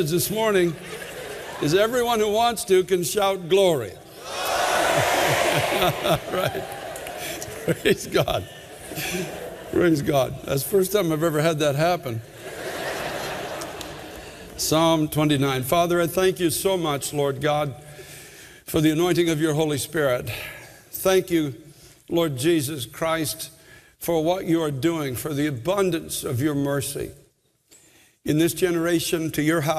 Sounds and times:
Speech: 0.0s - 0.8s, 1.6s - 4.0s, 9.7s - 12.2s, 14.6s - 17.8s, 18.7s - 27.2s, 28.3s - 29.7s.

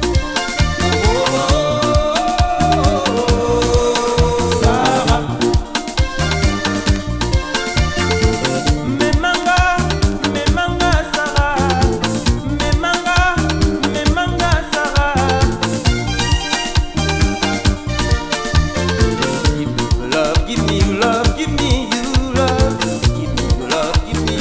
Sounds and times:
Song: 0.0s - 21.0s
Music of Africa: 0.0s - 24.4s.

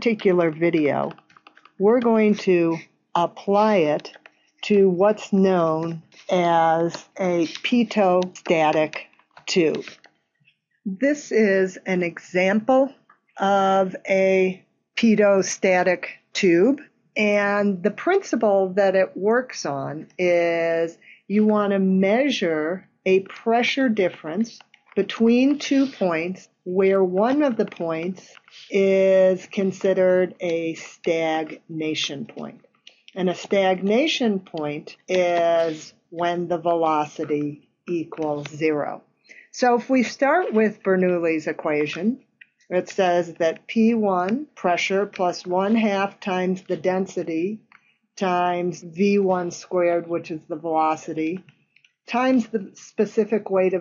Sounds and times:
Speech: 0.0s - 1.2s, 1.8s - 10.0s, 10.9s - 47.6s, 48.2s - 51.4s, 52.1s - 53.8s.

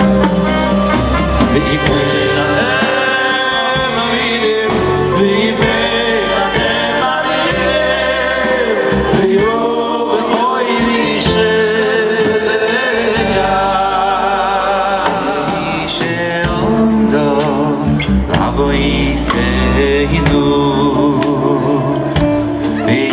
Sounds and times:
Inside, large room or hall: 0.0s - 23.1s
Choir: 1.0s - 23.1s.

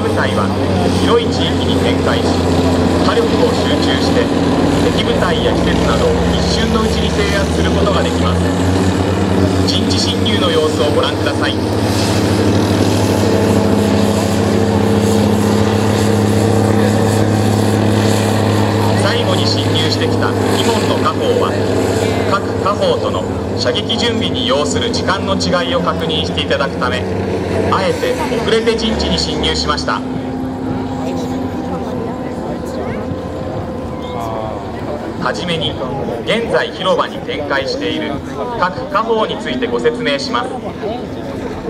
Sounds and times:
Speech: 0.0s - 8.6s, 9.5s - 11.7s, 18.8s - 33.2s, 33.9s - 41.6s
Outside, urban or manmade: 0.0s - 41.6s.

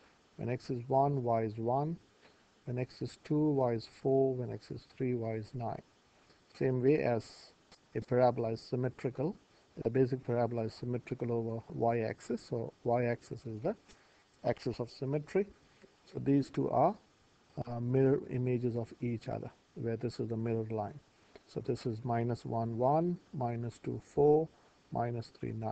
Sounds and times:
Speech: 0.4s - 2.0s, 2.7s - 5.8s, 6.5s - 13.8s, 14.4s - 15.5s, 16.1s - 17.0s, 17.6s - 25.7s.

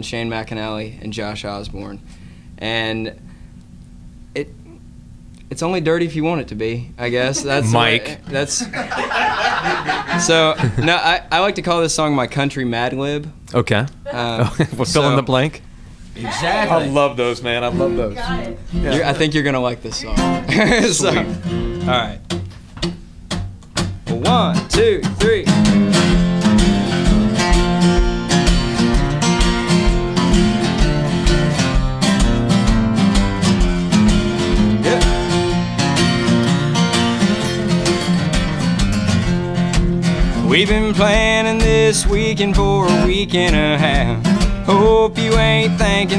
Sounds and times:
Speech: 5.5s - 8.7s, 10.2s - 15.6s, 24.1s - 25.5s
Music: 17.3s - 19.3s, 20.0s - 46.1s.

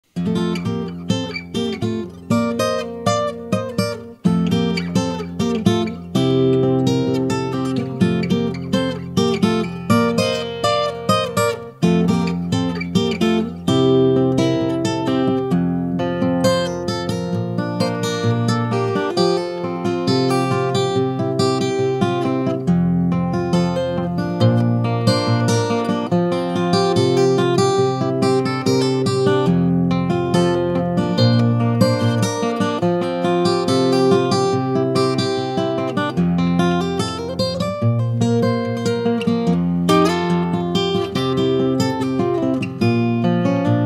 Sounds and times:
Music: 0.0s - 43.8s.

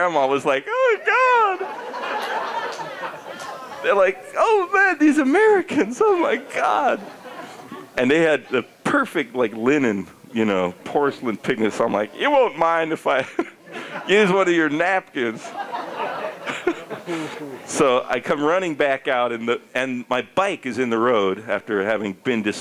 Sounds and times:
Speech: 0.0s - 1.7s, 3.8s - 7.1s, 8.0s - 13.3s, 14.1s - 15.6s, 17.3s - 22.6s.

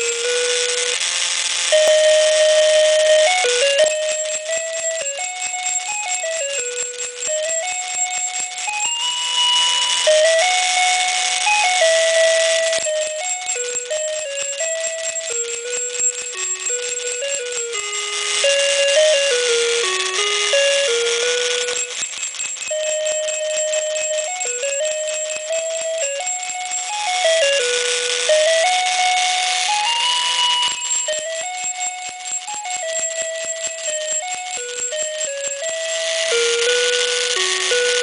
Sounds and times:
Christmas music: 0.0s - 38.0s
Jingle bell: 1.7s - 38.0s.

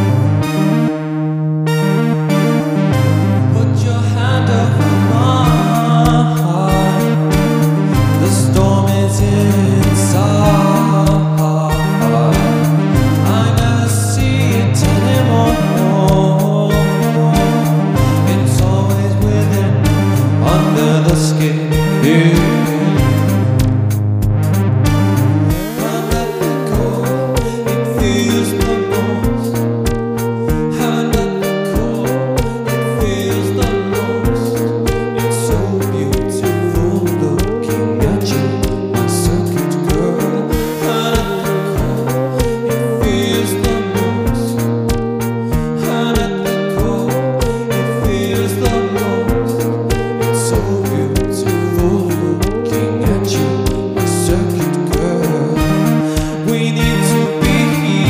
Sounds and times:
Music: 0.0s - 58.1s.

